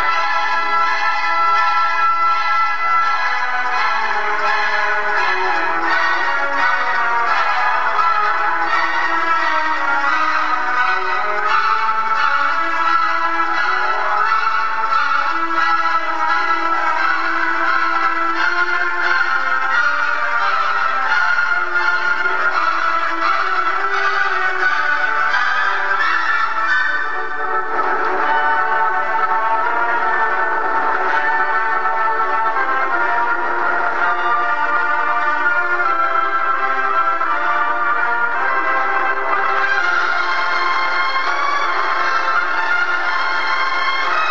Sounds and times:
Music: 0.0s - 44.3s.

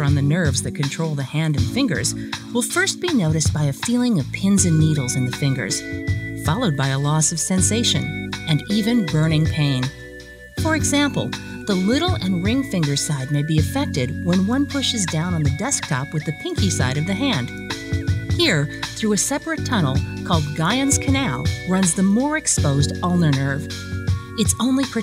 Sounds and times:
Speech: 0.0s - 5.8s, 6.4s - 10.0s, 10.6s - 17.5s, 18.4s - 23.7s, 24.4s - 25.0s
Music: 0.0s - 25.0s.

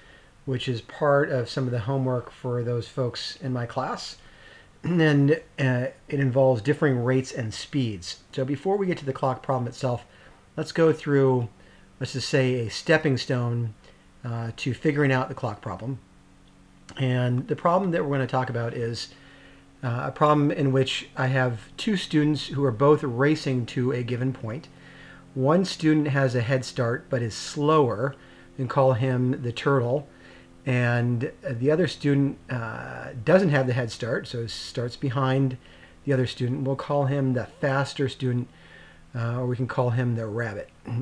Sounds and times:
Speech: 0.5s - 4.2s, 4.8s - 16.1s, 16.9s - 19.2s, 19.8s - 24.7s, 25.4s - 38.5s, 39.1s - 41.0s.

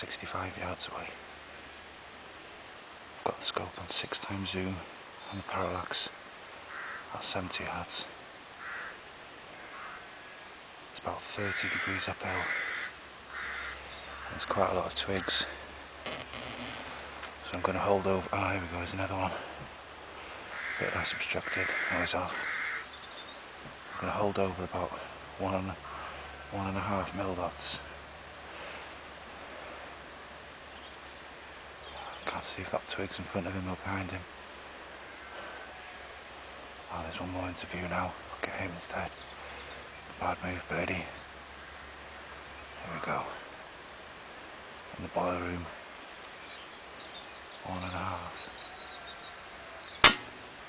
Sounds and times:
Speech: 0.0s - 1.2s, 3.2s - 6.2s, 7.1s - 8.2s, 11.0s - 12.6s, 14.3s - 15.6s, 17.4s - 19.5s, 20.8s - 22.4s, 24.0s - 25.8s, 26.5s - 27.9s, 32.0s - 34.3s, 36.9s - 39.2s, 40.2s - 41.2s, 42.8s - 43.4s, 44.9s - 45.8s, 47.6s - 48.4s.

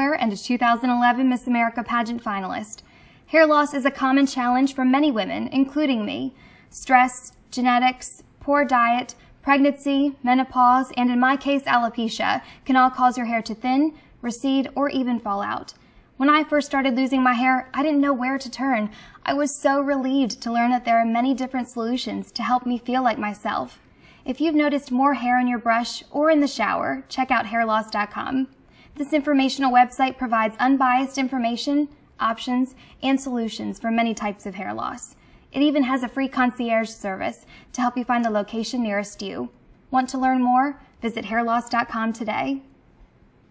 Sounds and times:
Female speech, woman speaking: 0.0s - 42.7s.

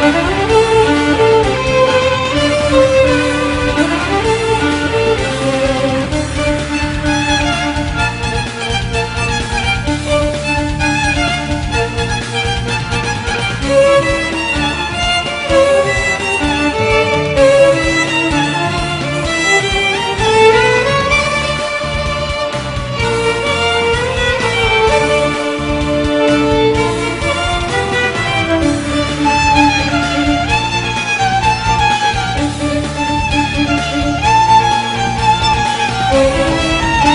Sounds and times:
Violin, fiddle: 0.0s - 37.1s.

